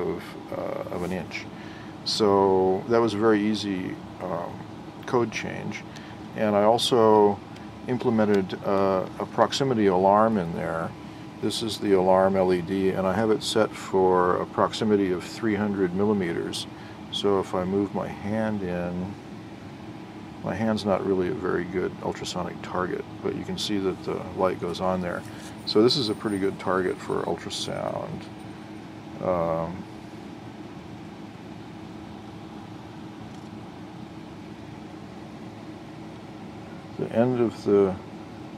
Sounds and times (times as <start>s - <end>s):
Speech: 0.0s - 19.2s, 20.4s - 28.3s, 29.2s - 29.9s, 37.0s - 38.0s.